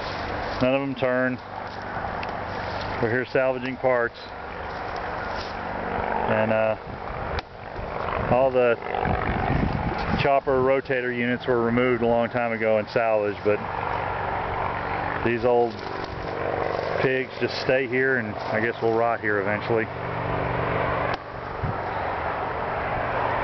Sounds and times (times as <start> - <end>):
Speech: 0.6 - 1.4, 3.0 - 4.3, 6.3 - 6.8, 8.3 - 8.8, 10.1 - 13.7, 15.2 - 15.9, 17.0 - 19.9.